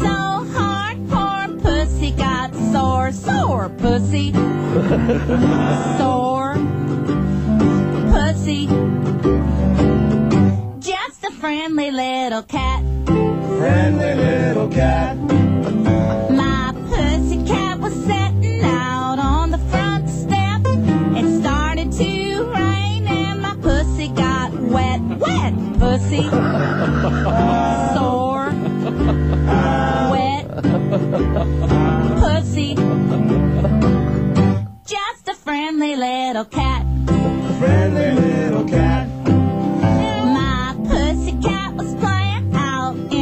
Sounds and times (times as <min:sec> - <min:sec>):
Music: 0:00.0 - 0:43.2.